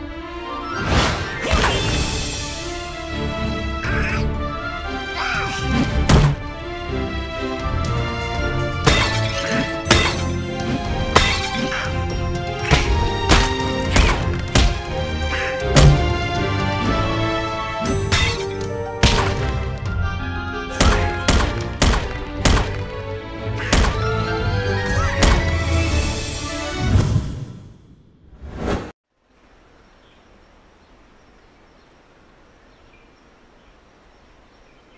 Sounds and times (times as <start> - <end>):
Music: 0.0 - 27.2.